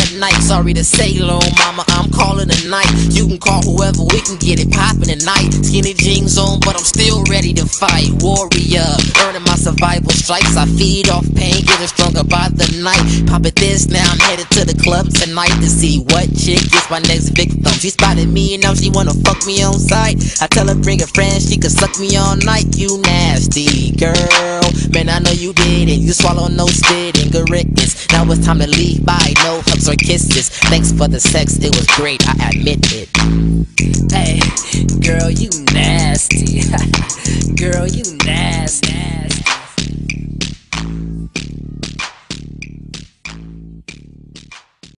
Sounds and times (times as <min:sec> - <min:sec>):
Hip hop music: 0:00.0 - 0:44.9.